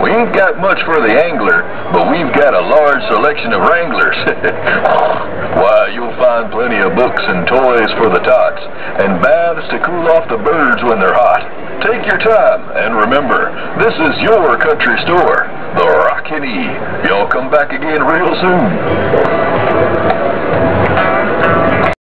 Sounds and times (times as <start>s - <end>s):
Speech: 0.0s - 19.3s.